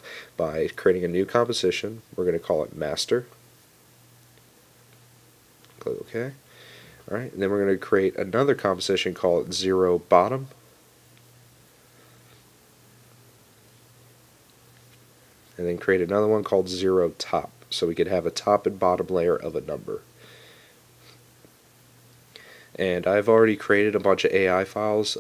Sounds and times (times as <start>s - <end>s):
Speech: 0.4s - 3.4s, 5.8s - 6.4s, 7.1s - 10.6s, 15.6s - 20.1s, 22.8s - 25.2s.